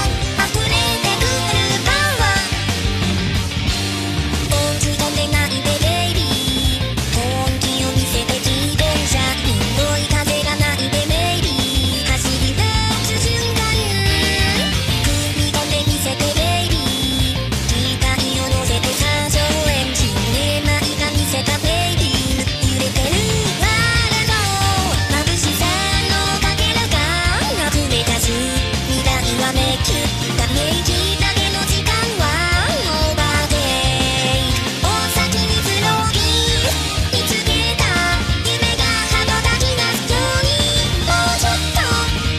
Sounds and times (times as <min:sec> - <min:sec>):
Music: 0:00.0 - 0:42.3.